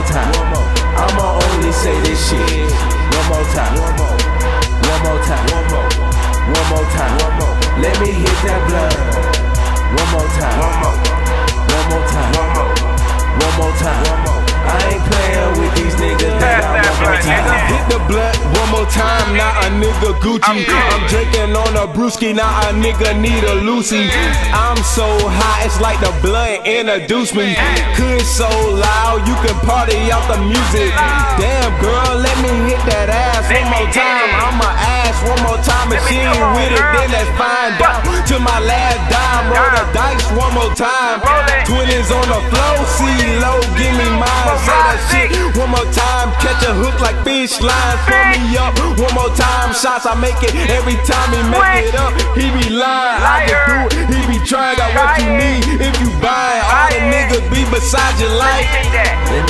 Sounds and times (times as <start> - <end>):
Independent music: 0.0 - 59.5
Soul music: 0.0 - 59.5
Dance music: 12.4 - 21.6, 27.6 - 59.5.